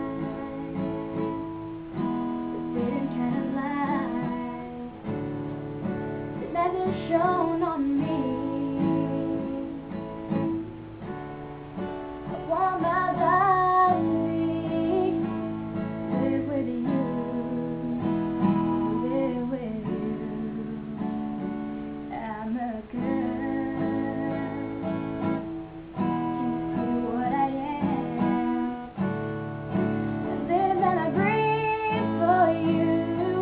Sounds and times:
Female singing: 0:00.0 - 0:01.4, 0:02.6 - 0:05.0, 0:06.4 - 0:09.8, 0:12.3 - 0:21.0, 0:22.1 - 0:25.4, 0:26.1 - 0:28.8, 0:30.2 - 0:33.4
Acoustic guitar: 0:00.0 - 0:33.4.

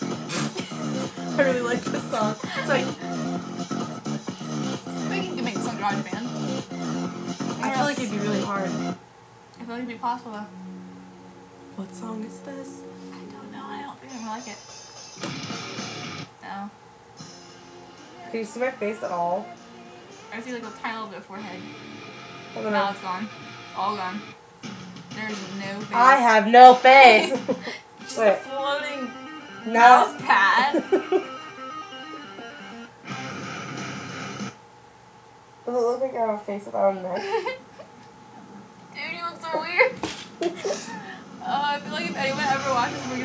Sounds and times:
Music: 0:00.0 - 0:09.0, 0:10.4 - 0:16.3, 0:17.2 - 0:34.6, 0:41.0 - 0:43.2.

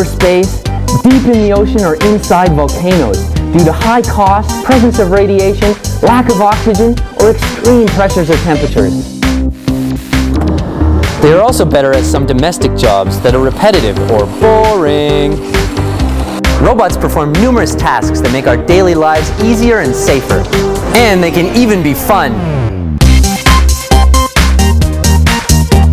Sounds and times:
Speech: 0:00.0 - 0:09.0, 0:11.2 - 0:15.4, 0:16.6 - 0:22.4
Music: 0:00.0 - 0:25.9.

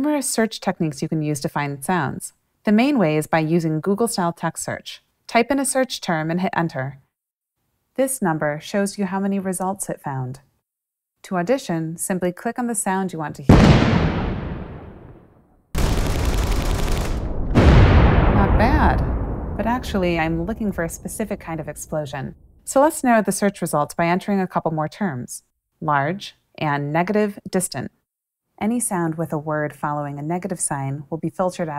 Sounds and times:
Speech: 0:00.0 - 0:07.0, 0:08.0 - 0:10.5, 0:11.2 - 0:13.5, 0:18.4 - 0:28.0, 0:28.6 - 0:31.7.

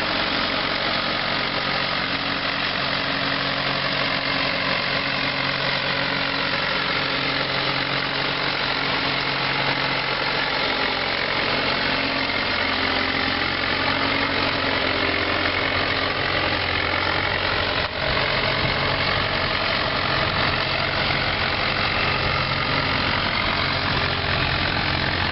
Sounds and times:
Motor vehicle (road): 0:00.0 - 0:25.3.

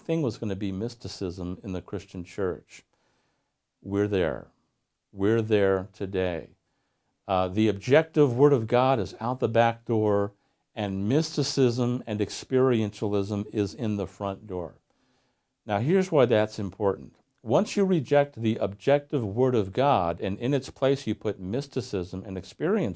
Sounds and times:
Speech: 0:00.0 - 0:02.9, 0:03.8 - 0:06.6, 0:07.3 - 0:14.8, 0:15.6 - 0:22.9.

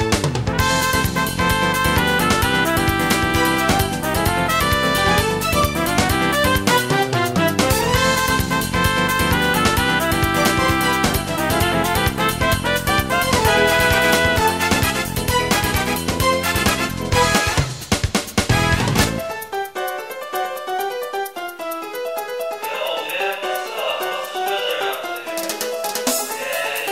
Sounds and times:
Music: 0:00.0 - 0:26.9.

